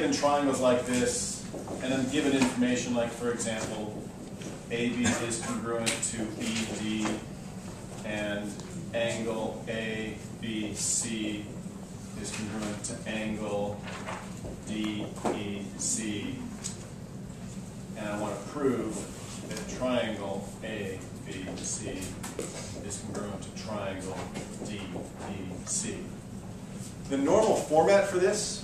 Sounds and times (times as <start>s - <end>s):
Speech: 0.0s - 4.0s, 4.7s - 7.3s, 8.0s - 11.6s, 12.2s - 13.9s, 14.7s - 16.6s, 18.0s - 22.2s, 22.8s - 26.2s, 27.1s - 28.6s.